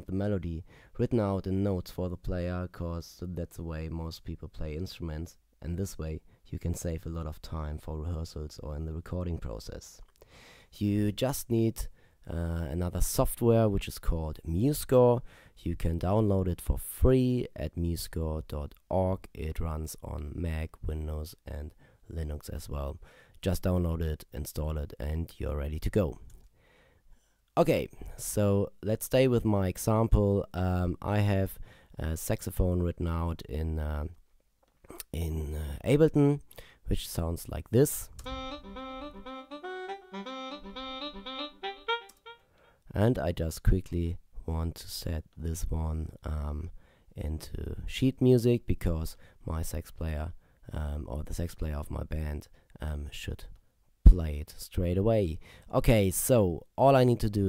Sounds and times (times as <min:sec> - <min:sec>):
Speech: 0:00.0 - 0:10.1, 0:10.7 - 0:26.3, 0:27.6 - 0:34.2, 0:34.9 - 0:38.2, 0:42.9 - 0:57.4.